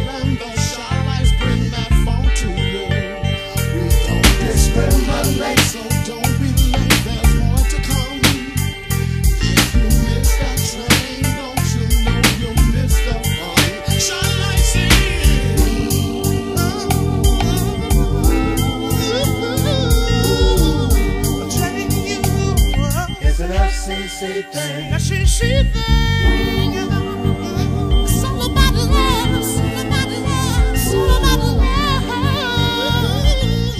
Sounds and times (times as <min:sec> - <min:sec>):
Music: 0:00.0 - 0:33.7.